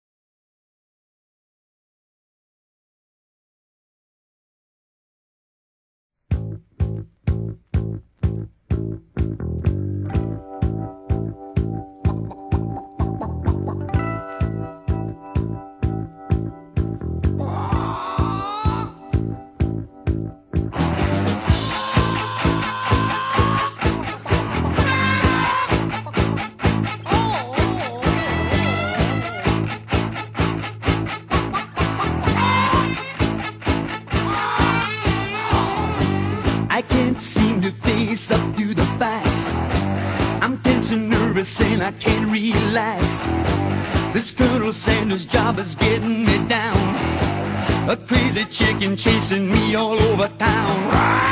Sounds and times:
Music: 0:06.2 - 0:51.3.

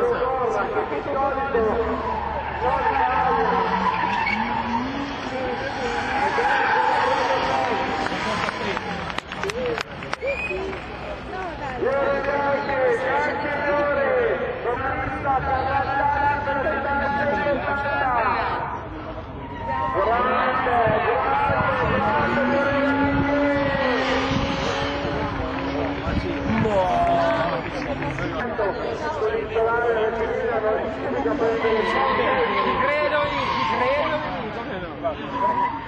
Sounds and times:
Skidding: 0:00.0 - 0:18.1, 0:18.8 - 0:35.8
Race car, auto racing: 0:00.0 - 0:35.8.

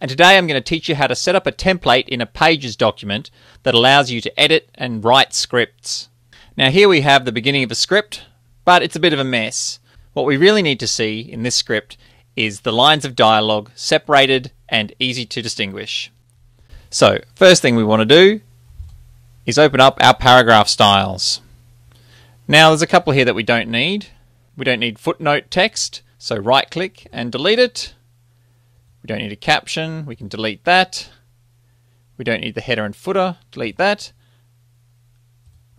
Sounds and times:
Speech: 0:00.0 - 0:16.2, 0:16.9 - 0:18.5, 0:19.5 - 0:21.5, 0:22.5 - 0:28.0, 0:29.0 - 0:31.2, 0:32.2 - 0:34.2.

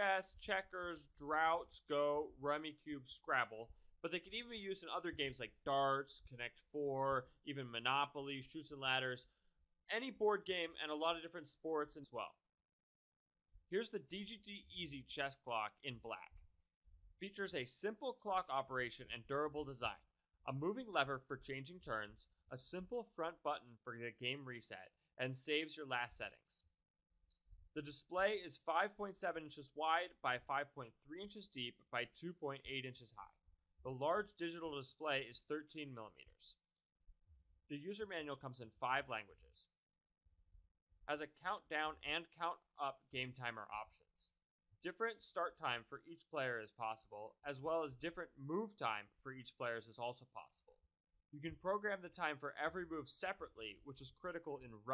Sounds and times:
Speech: 0:00.0 - 0:12.4, 0:13.8 - 0:16.4, 0:17.2 - 0:26.7, 0:27.8 - 0:36.6, 0:37.7 - 0:39.8, 0:41.1 - 0:50.8, 0:51.4 - 0:54.9.

